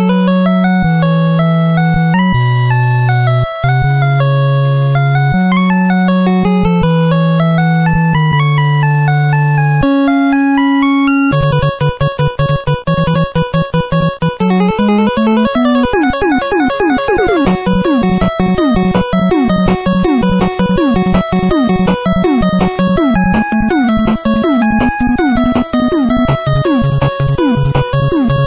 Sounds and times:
Music: 0:00.0 - 0:28.4.

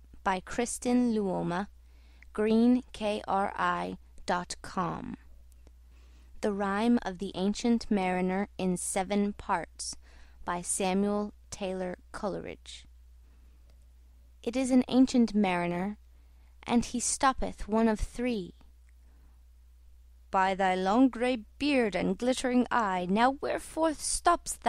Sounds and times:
Speech: 0:00.2 - 0:01.7, 0:02.4 - 0:05.3, 0:06.4 - 0:12.9, 0:14.5 - 0:16.0, 0:16.6 - 0:18.7, 0:20.3 - 0:24.6.

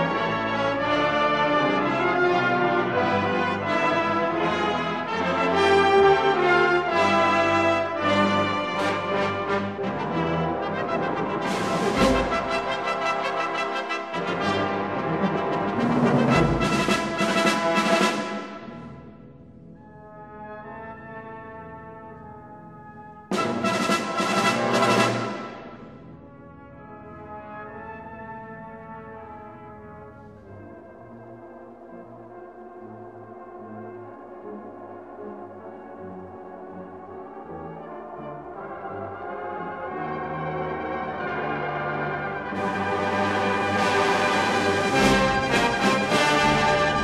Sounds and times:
Brass instrument: 0:00.0 - 0:47.0
Classical music: 0:00.0 - 0:47.0
Orchestra: 0:00.0 - 0:47.0.

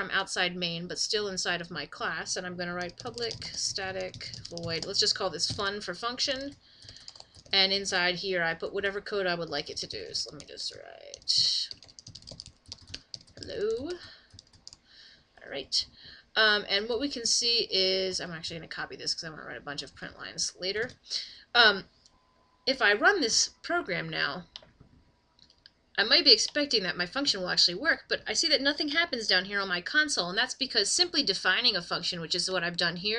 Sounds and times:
Speech: 0:00.0 - 0:06.6, 0:07.6 - 0:11.8, 0:13.4 - 0:14.2, 0:15.4 - 0:21.8, 0:22.7 - 0:24.5, 0:26.0 - 0:33.1.

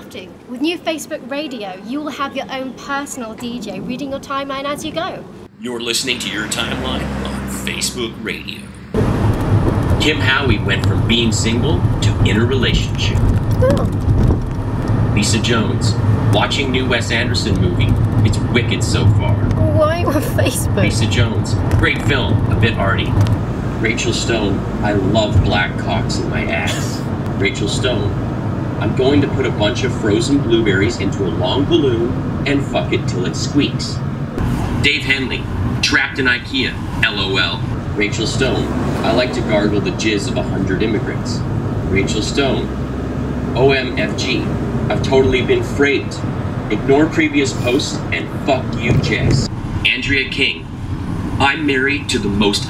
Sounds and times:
Speech: 0:00.0 - 0:08.7, 0:10.0 - 0:13.9, 0:15.2 - 0:23.1, 0:23.8 - 0:28.2, 0:28.8 - 0:34.0, 0:34.8 - 0:42.7, 0:43.6 - 0:50.6, 0:51.4 - 0:52.6.

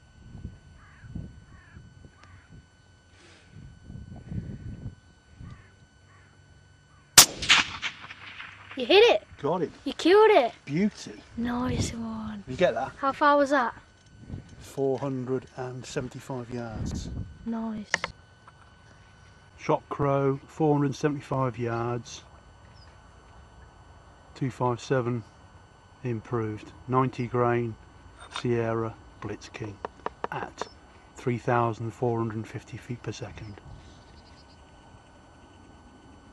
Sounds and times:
Speech: 0:14.7 - 0:18.1, 0:19.6 - 0:22.3, 0:24.4 - 0:25.3, 0:26.0 - 0:33.6.

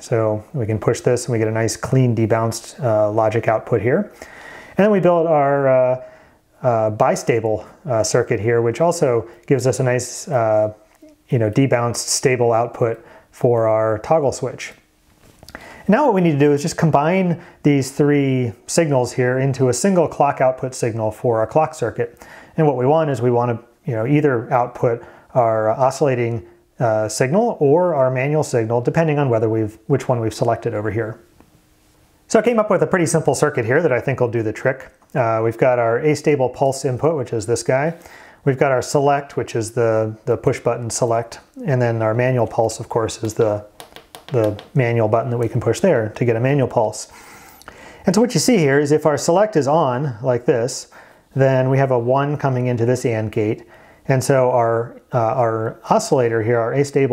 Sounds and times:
Speech: 0:00.0 - 0:04.2, 0:04.8 - 0:14.8, 0:15.8 - 0:31.2, 0:32.3 - 0:47.2, 0:48.0 - 0:57.1.

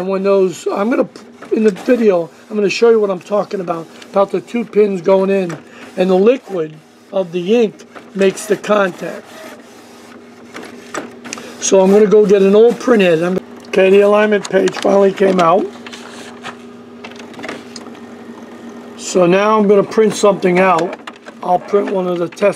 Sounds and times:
Speech: 0:00.0 - 0:09.2, 0:11.6 - 0:15.8, 0:19.0 - 0:22.5.

